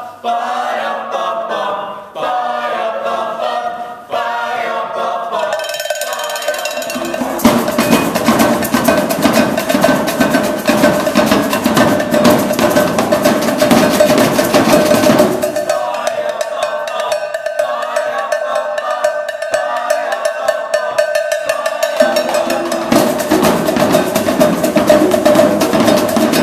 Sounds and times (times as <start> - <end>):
Drum: 5.4 - 26.4.